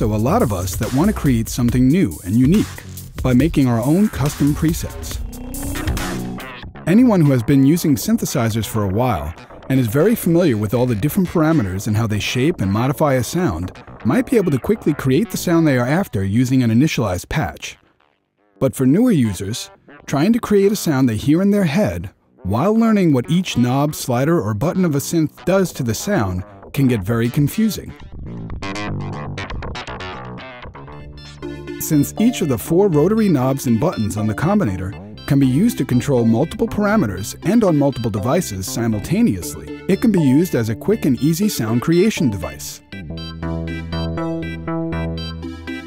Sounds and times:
Speech: 0:00.0 - 0:05.2, 0:06.9 - 0:17.8, 0:18.6 - 0:27.9, 0:31.8 - 0:42.8
Music: 0:00.0 - 0:45.8.

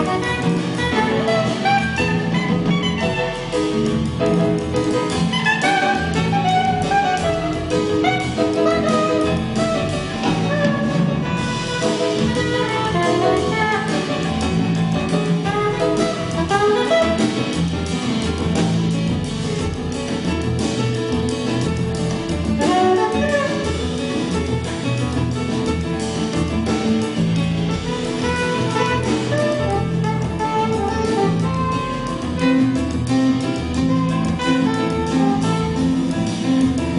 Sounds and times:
Double bass: 0:00.0 - 0:36.9
Drum kit: 0:00.0 - 0:36.9
Jazz: 0:00.0 - 0:36.9.

